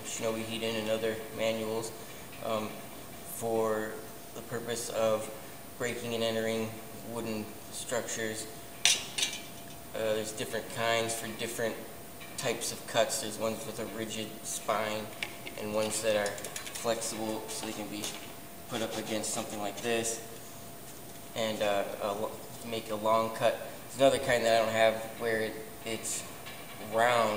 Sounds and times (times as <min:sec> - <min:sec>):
Speech: 0:00.0 - 0:08.5, 0:10.0 - 0:20.3, 0:21.4 - 0:27.3.